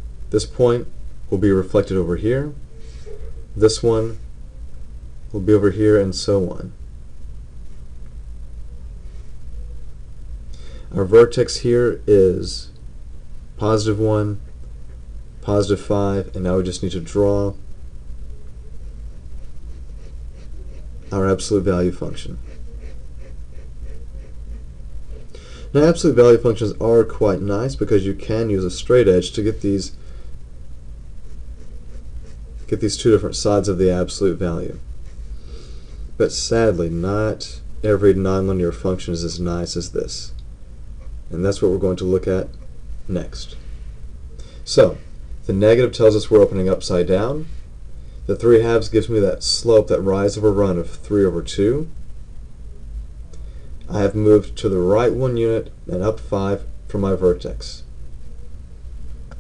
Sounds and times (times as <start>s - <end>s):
Inside, small room: 0.0s - 59.4s
Speech: 0.3s - 2.6s, 3.6s - 4.2s, 5.3s - 6.8s, 10.9s - 12.8s, 13.6s - 14.4s, 15.4s - 17.6s, 21.1s - 22.4s, 25.7s - 30.0s, 32.7s - 34.8s, 36.2s - 40.4s, 41.3s - 43.6s, 44.7s - 47.5s, 48.3s - 52.0s, 53.9s - 57.9s.